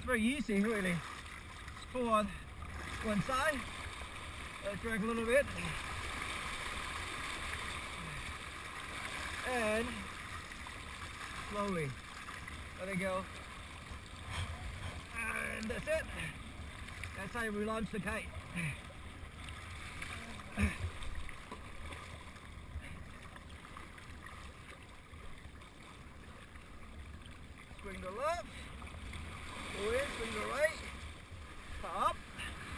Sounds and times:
Speech: 0.0 - 1.0, 9.4 - 10.0, 29.8 - 30.9
Stream: 0.0 - 32.7.

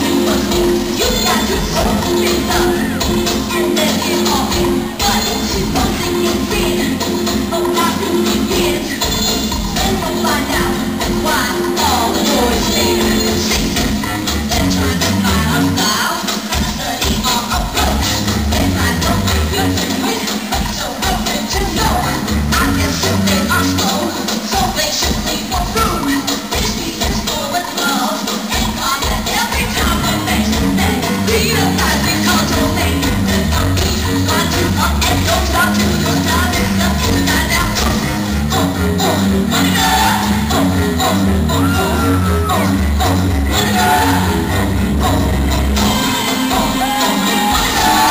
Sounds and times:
Music: 0.0 - 48.1.

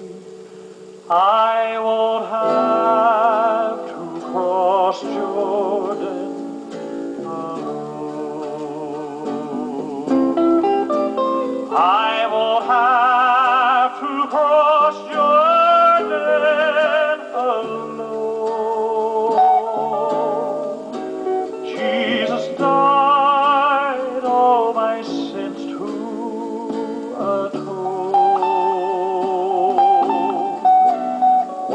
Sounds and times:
Plucked string instrument: 0.0 - 31.7.

